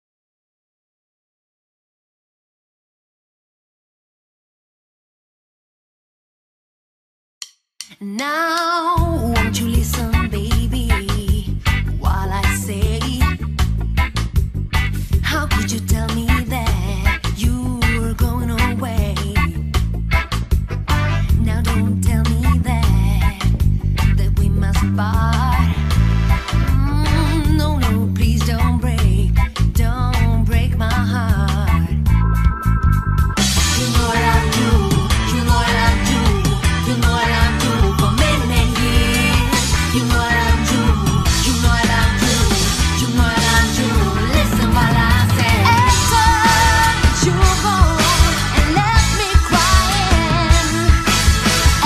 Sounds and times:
Music: 8.6s - 51.8s.

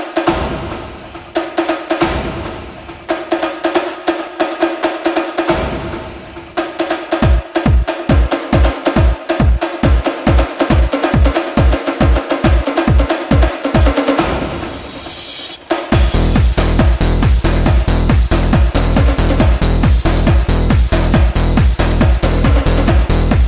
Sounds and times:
Dance music: 0.0s - 23.4s.

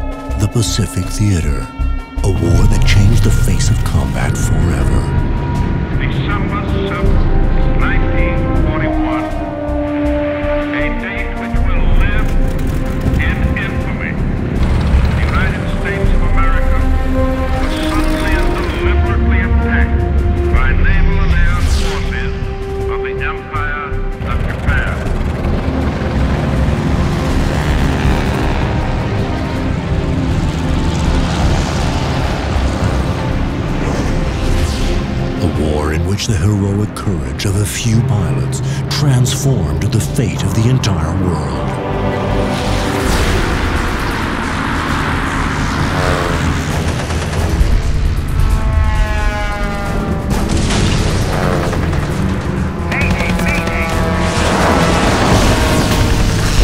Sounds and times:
Music: 0.0s - 56.6s
Speech: 0.4s - 5.2s, 10.8s - 12.4s, 13.2s - 14.2s, 15.2s - 16.8s, 20.6s - 25.1s, 35.4s - 41.8s, 53.0s - 54.0s
Fixed-wing aircraft, airplane: 5.2s - 19.0s, 23.8s - 35.3s, 39.6s - 56.6s.

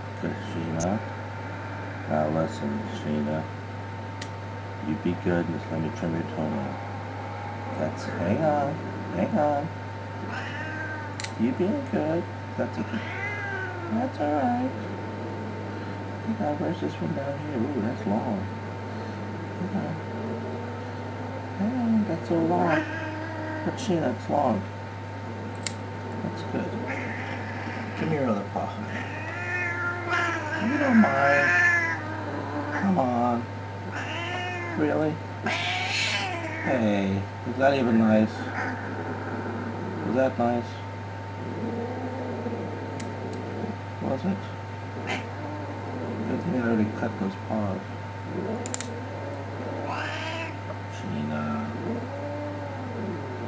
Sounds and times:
Speech: 0.2s - 1.0s, 2.1s - 3.5s, 4.8s - 6.8s, 7.8s - 9.8s, 11.3s - 13.1s, 13.9s - 14.8s, 16.3s - 18.5s, 19.6s - 20.0s, 21.6s - 22.9s, 23.7s - 24.7s, 26.2s - 26.9s, 28.0s - 29.0s, 30.6s - 31.5s, 32.8s - 33.5s, 34.8s - 35.2s, 36.7s - 38.5s, 40.1s - 40.9s, 44.0s - 44.6s, 46.3s - 48.6s, 50.9s - 52.0s
Meow: 10.3s - 11.1s, 12.9s - 14.0s, 28.9s - 32.0s, 34.0s - 34.8s, 35.4s - 36.7s, 49.9s - 50.6s
Caterwaul: 10.3s - 11.2s, 12.9s - 14.0s, 22.6s - 23.8s, 26.9s - 28.2s, 28.8s - 32.9s, 33.9s - 36.8s, 49.2s - 50.7s, 51.4s - 53.4s.

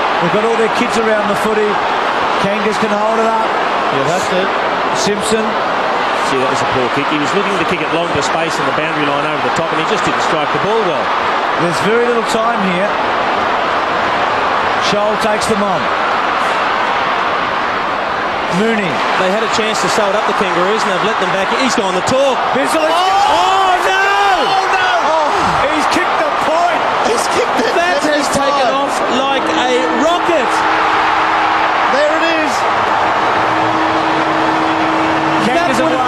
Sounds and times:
Speech: 0.2s - 1.8s, 2.4s - 5.6s, 6.2s - 13.0s, 14.8s - 15.9s, 18.5s - 30.6s, 35.4s - 36.0s.

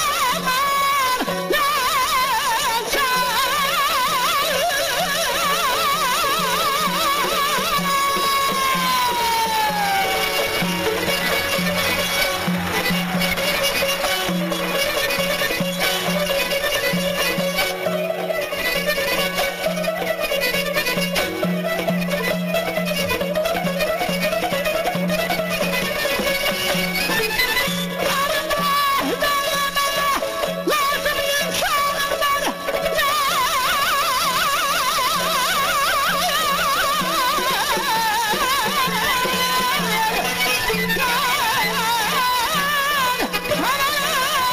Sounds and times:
Orchestra: 0.0s - 44.5s.

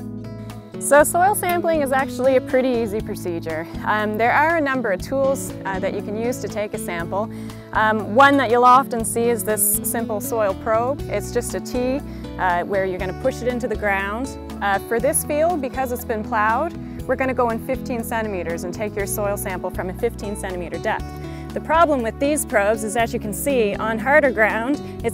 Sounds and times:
Music: 0.0s - 25.1s
Speech: 0.9s - 21.0s, 21.6s - 25.1s.

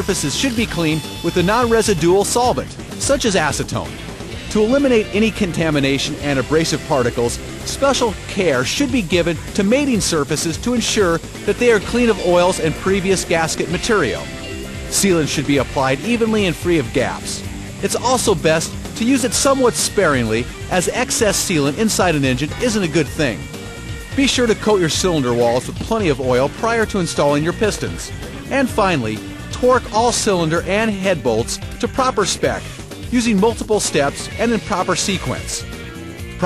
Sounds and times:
Speech: 0.0s - 14.2s, 14.9s - 23.4s, 24.2s - 35.6s
Music: 0.0s - 36.4s.

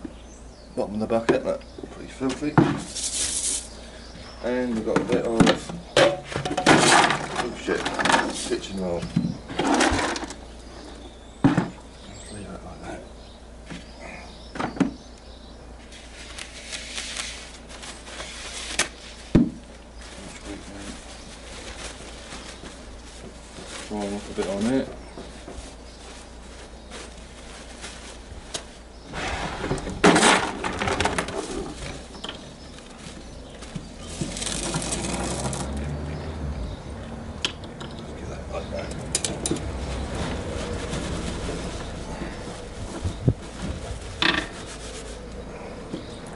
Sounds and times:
Speech: 0.8s - 2.8s, 4.4s - 5.7s, 7.3s - 9.2s, 12.1s - 13.1s, 20.2s - 21.0s, 23.9s - 25.0s, 38.0s - 39.1s
Outside, rural or natural: 4.9s - 12.4s, 25.9s - 46.3s.

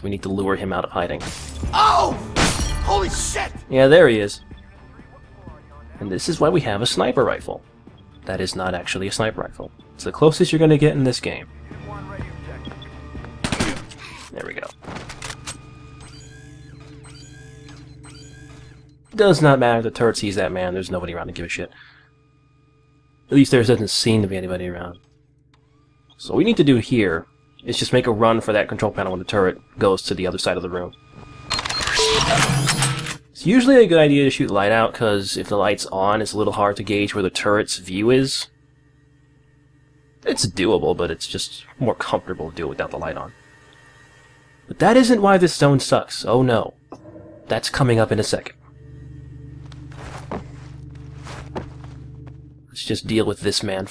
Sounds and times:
Speech: 0.0s - 1.2s, 2.9s - 7.6s, 8.2s - 12.6s, 14.3s - 14.7s, 19.2s - 21.8s, 23.3s - 25.0s, 26.2s - 30.9s, 33.4s - 38.5s, 40.2s - 43.3s, 44.7s - 46.7s, 47.5s - 48.6s, 52.7s - 53.9s.

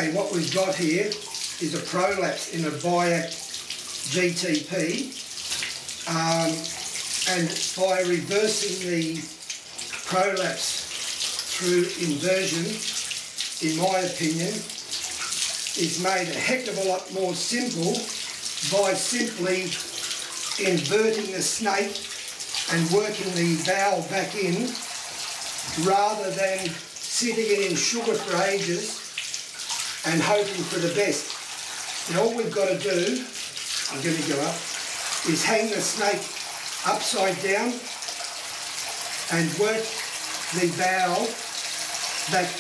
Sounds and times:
Water: 0.0s - 42.6s
Water tap, faucet: 0.0s - 42.6s.

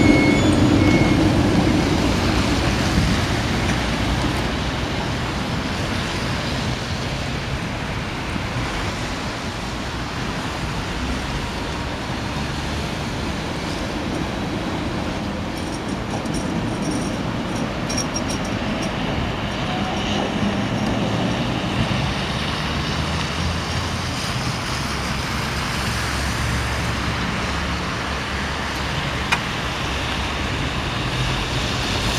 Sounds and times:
Outside, urban or manmade: 0.0s - 32.1s
Railroad car, train wagon: 0.0s - 32.1s
Train: 0.0s - 32.1s.

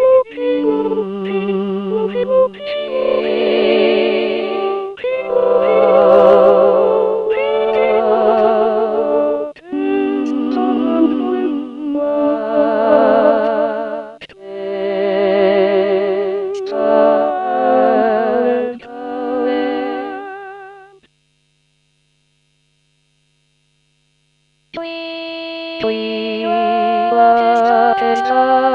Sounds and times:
Music: 0.0s - 21.1s, 24.8s - 28.7s.

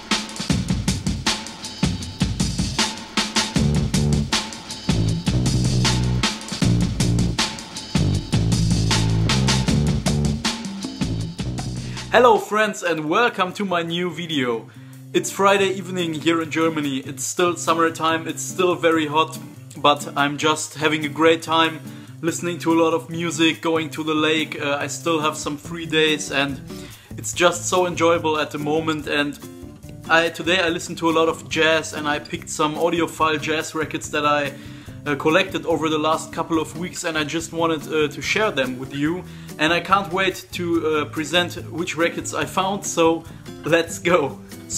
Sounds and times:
Music: 0.0s - 44.7s
Speech: 12.1s - 26.6s, 27.2s - 29.4s, 30.1s - 44.7s.

